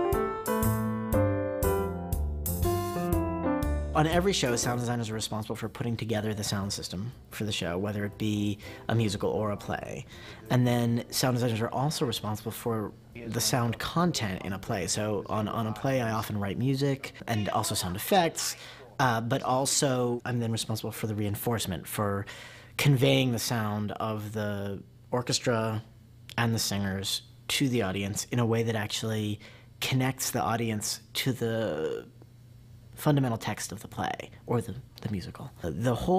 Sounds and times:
Speech: 4.0s - 32.1s, 33.0s - 36.1s.

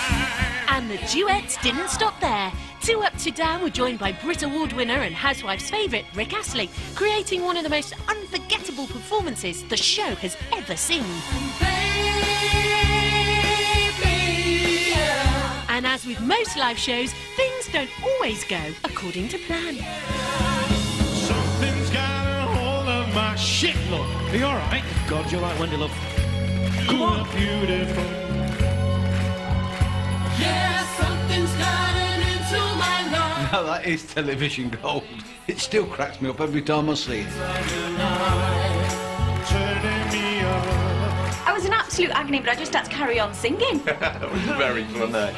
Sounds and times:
Music: 0.0s - 45.3s.

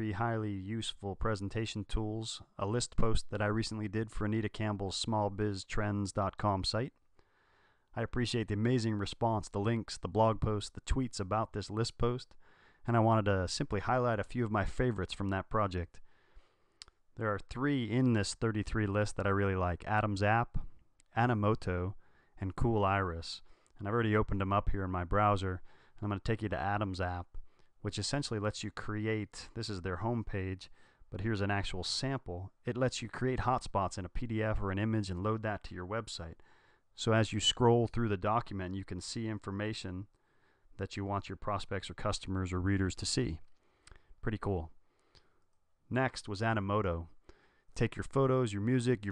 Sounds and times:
Speech: 0.0s - 7.0s, 7.9s - 16.0s, 17.2s - 36.4s, 37.0s - 40.1s, 40.8s - 43.5s, 44.2s - 44.8s, 45.9s - 47.2s, 47.8s - 49.1s.

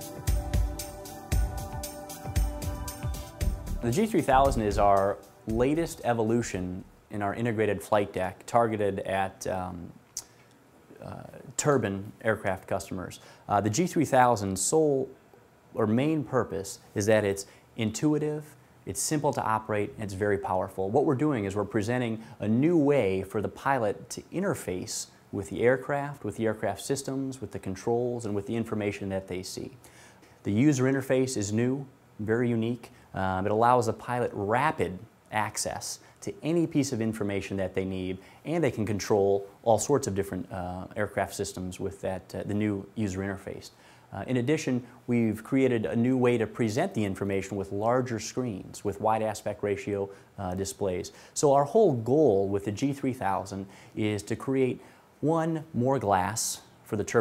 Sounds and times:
Speech: 3.8s - 10.3s, 10.9s - 29.8s, 30.4s - 57.2s.

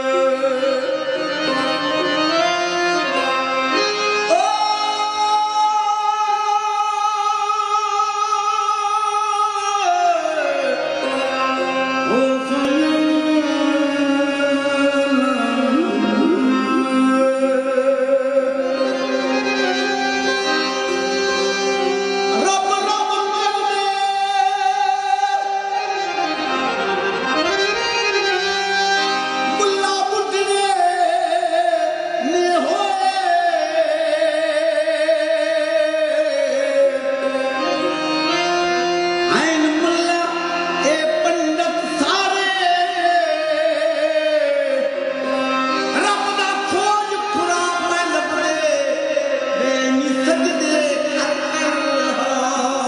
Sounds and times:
Traditional music: 0.0s - 52.8s.

